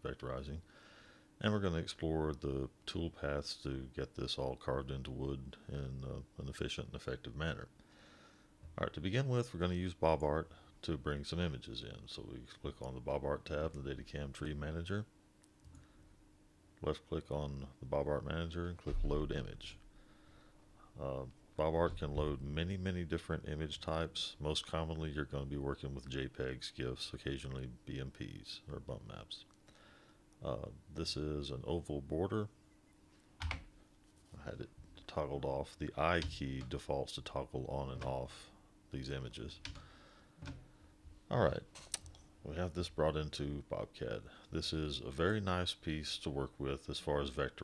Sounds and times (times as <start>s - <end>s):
Speech: 0.0s - 0.6s, 1.4s - 7.7s, 8.8s - 15.1s, 16.8s - 19.8s, 21.0s - 29.5s, 30.4s - 32.5s, 34.3s - 39.7s, 41.3s - 41.7s, 42.4s - 47.6s.